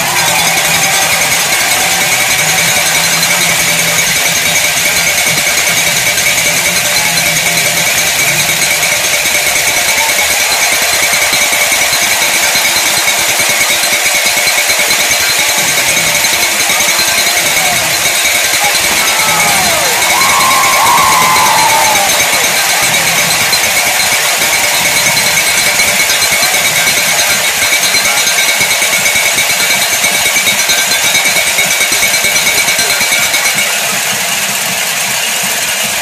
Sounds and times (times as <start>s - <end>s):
Music: 0.0s - 36.0s
Speech: 8.3s - 35.9s.